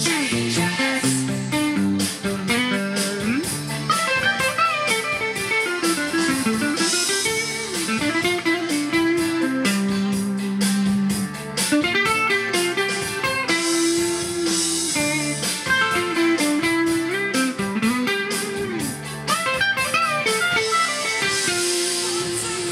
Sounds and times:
Blues: 0.0 - 22.7
Electric guitar: 0.0 - 22.7
Tapping (guitar technique): 0.0 - 22.7.

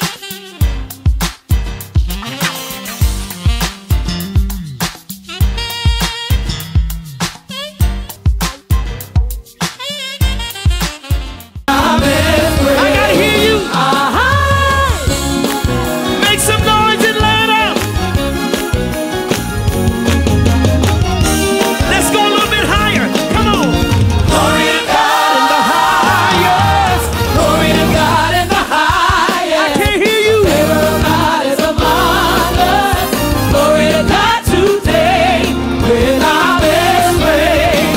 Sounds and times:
Music: 0.0 - 37.9
Speech: 16.2 - 17.8, 21.9 - 23.7.

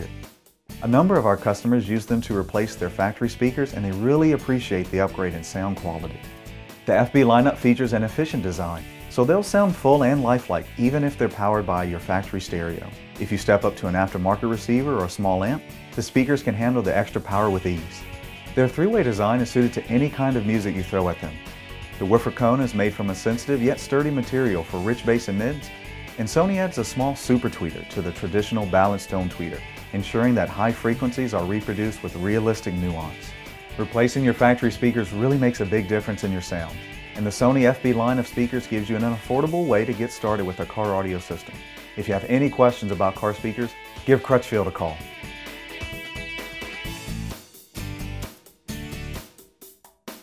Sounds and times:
Music: 0.0 - 50.2
Speech: 0.8 - 6.2, 6.9 - 18.0, 18.6 - 21.4, 22.0 - 45.1.

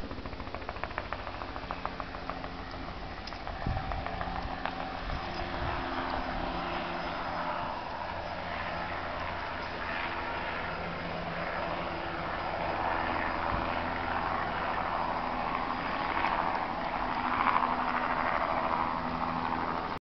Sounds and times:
Helicopter: 0.0 - 20.0.

